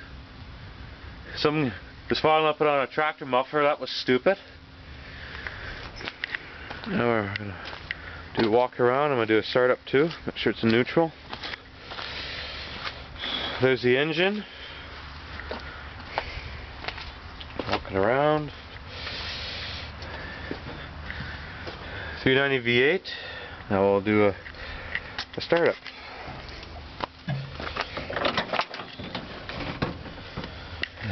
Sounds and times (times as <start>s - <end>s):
Speech: 1.3s - 4.5s, 6.9s - 7.6s, 8.4s - 11.2s, 13.6s - 14.5s, 17.8s - 18.6s, 22.2s - 24.4s, 25.4s - 25.8s.